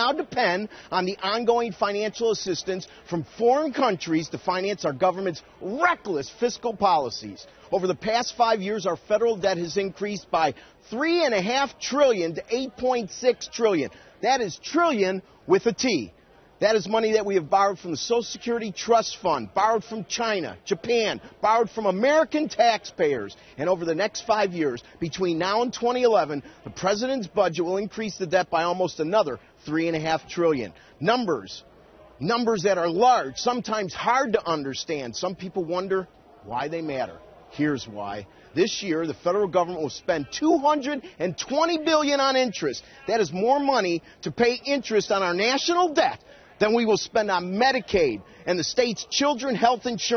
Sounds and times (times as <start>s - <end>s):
Male speech, man speaking: 0.0s - 50.1s
Narration, monologue: 0.0s - 50.1s.